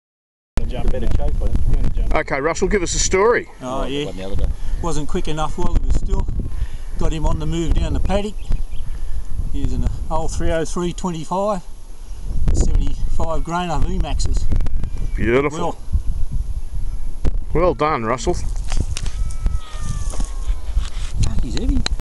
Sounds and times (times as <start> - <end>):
Speech: 0.6 - 6.3, 12.6 - 14.5, 17.5 - 18.5, 21.2 - 22.0.